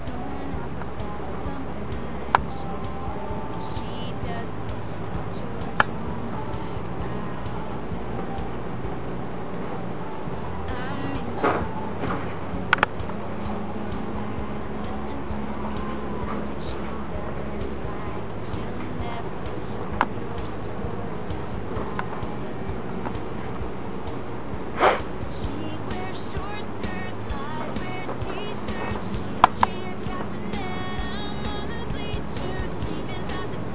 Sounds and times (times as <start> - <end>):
Music: 0.0 - 33.7.